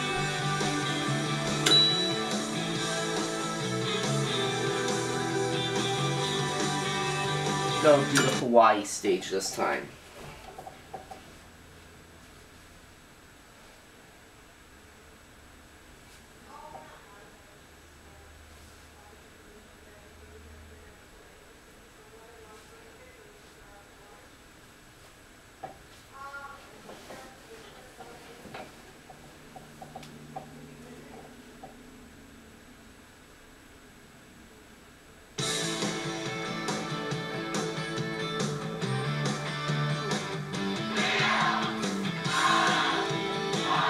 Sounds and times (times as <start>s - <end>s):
Speech: 7.8s - 10.0s, 16.4s - 24.4s, 26.1s - 28.6s.